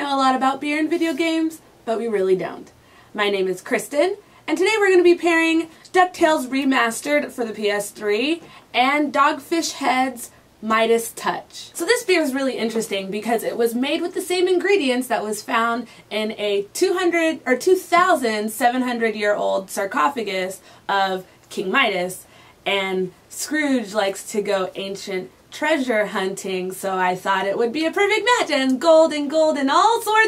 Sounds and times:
Speech: 0.0 - 30.2.

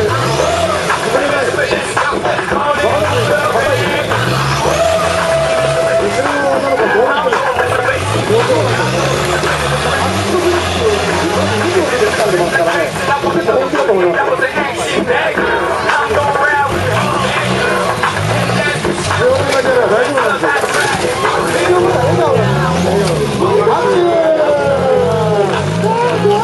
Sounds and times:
Car: 0.0 - 26.4
Music: 0.0 - 26.4
Speech: 5.5 - 26.4.

